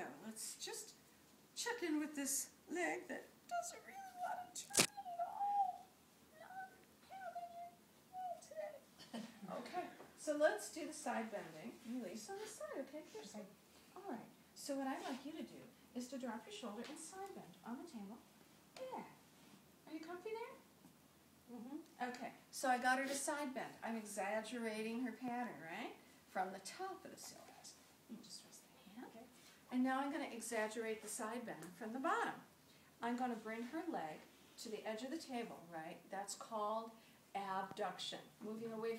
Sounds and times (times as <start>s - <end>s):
Speech: 1.6s - 5.8s, 9.4s - 18.2s, 21.5s - 38.9s.